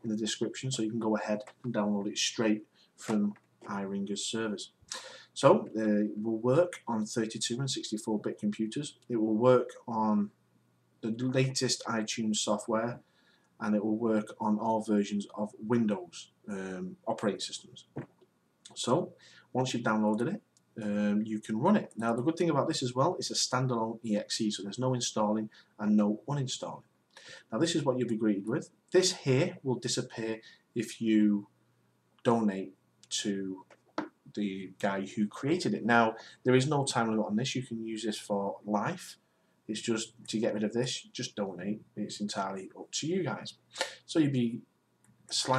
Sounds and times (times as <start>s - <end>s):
Speech: 0.0s - 10.4s, 11.0s - 13.0s, 13.6s - 18.0s, 18.7s - 26.9s, 27.5s - 31.5s, 32.2s - 44.7s, 45.3s - 45.5s.